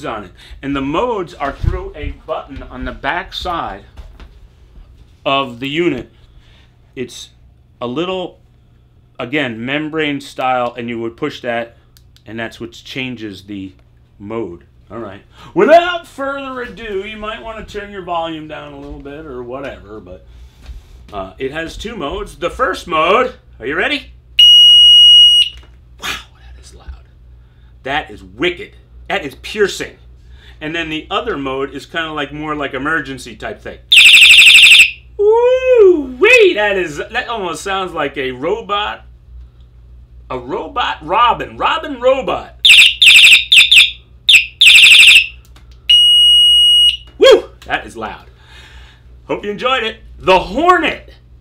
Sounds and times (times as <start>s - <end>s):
Speech: 0.0s - 4.0s, 5.2s - 6.1s, 7.0s - 8.4s, 9.2s - 20.3s, 21.1s - 24.1s, 26.0s - 27.1s, 27.8s - 30.0s, 30.6s - 33.9s, 35.2s - 39.1s, 40.3s - 42.6s, 47.2s - 48.3s, 49.3s - 51.2s.